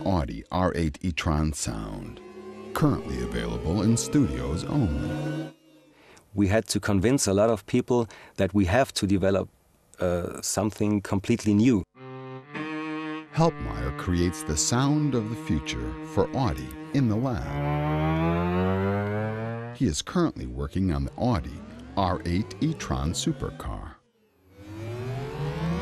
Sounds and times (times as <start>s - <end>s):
Speech: 0.0s - 2.2s, 2.8s - 5.1s, 6.4s - 11.9s, 13.4s - 17.6s, 19.8s - 24.0s
Music: 1.6s - 6.0s, 12.0s - 19.8s.